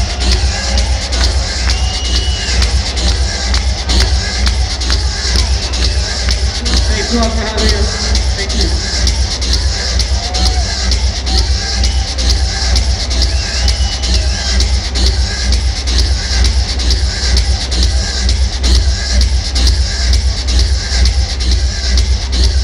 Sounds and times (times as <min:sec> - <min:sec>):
Music: 0:00.0 - 0:22.6
Speech: 0:06.6 - 0:08.9.